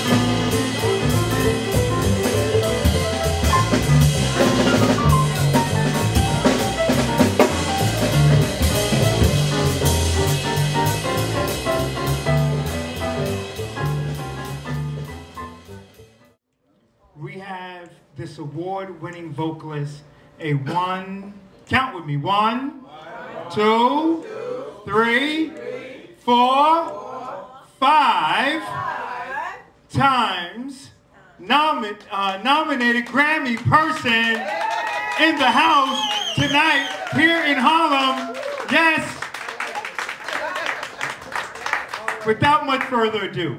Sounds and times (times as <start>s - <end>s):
Jazz: 0.0s - 16.4s
Speech: 16.7s - 34.4s, 35.2s - 39.2s, 42.1s - 43.5s.